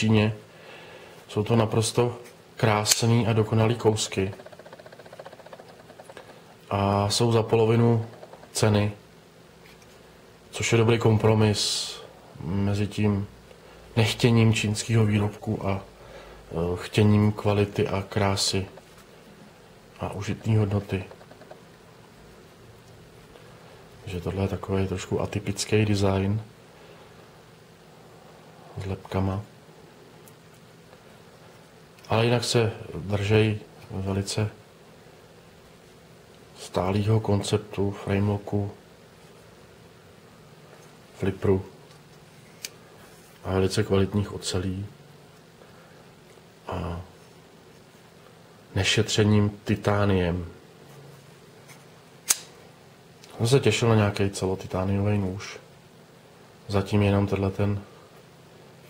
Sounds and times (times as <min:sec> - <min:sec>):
Speech: 0:00.0 - 0:00.5, 0:01.3 - 0:04.4, 0:06.7 - 0:09.0, 0:10.5 - 0:13.4, 0:14.0 - 0:15.9, 0:16.5 - 0:18.8, 0:20.0 - 0:21.2, 0:24.0 - 0:26.6, 0:28.7 - 0:29.5, 0:32.0 - 0:34.6, 0:36.6 - 0:38.8, 0:41.2 - 0:41.8, 0:43.4 - 0:45.0, 0:46.6 - 0:47.2, 0:48.7 - 0:50.6, 0:53.3 - 0:55.7, 0:56.6 - 0:57.9.